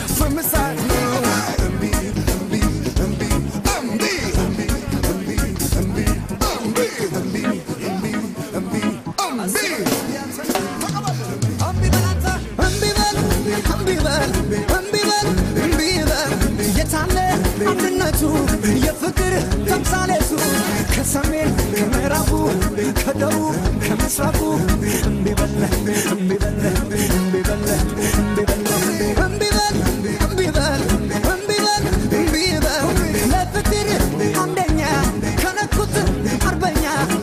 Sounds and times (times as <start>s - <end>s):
Music: 0.0s - 37.2s.